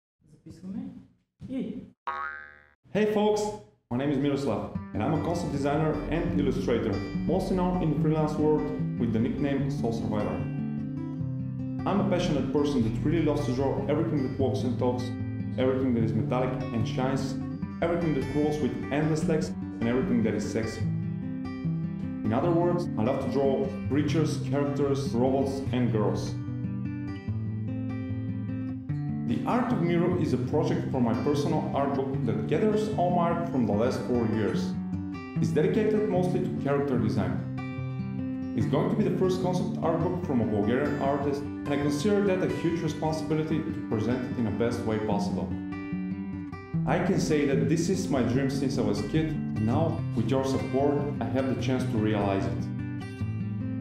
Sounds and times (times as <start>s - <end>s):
Speech: 0.5s - 1.9s, 3.0s - 10.4s, 11.8s - 20.8s, 22.3s - 26.4s, 29.3s - 34.8s, 35.4s - 37.4s, 38.6s - 45.6s, 46.9s - 52.7s
Boing: 2.1s - 2.8s
Music: 3.9s - 53.8s.